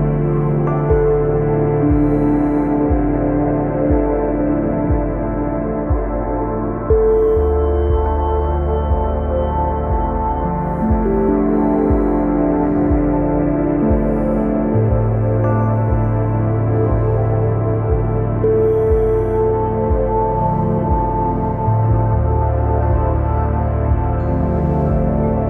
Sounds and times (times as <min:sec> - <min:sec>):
Ambient music: 0:00.0 - 0:25.4.